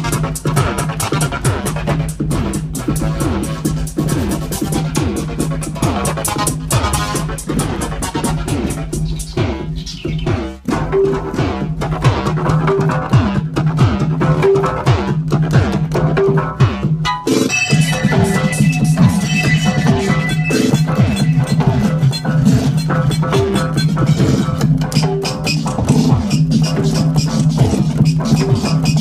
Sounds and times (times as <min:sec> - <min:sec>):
Electronica: 0:00.0 - 0:29.0.